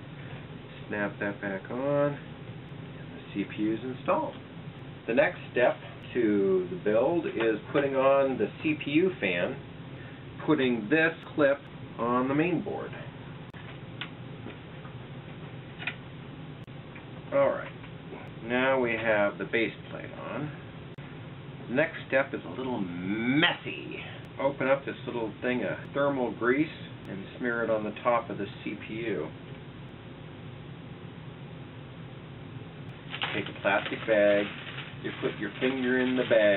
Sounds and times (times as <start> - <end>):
Inside, small room: 0.0 - 36.5
Speech: 0.8 - 2.3, 3.1 - 4.4, 5.1 - 9.6, 10.4 - 13.1, 17.3 - 20.6, 21.7 - 29.4, 33.2 - 36.5.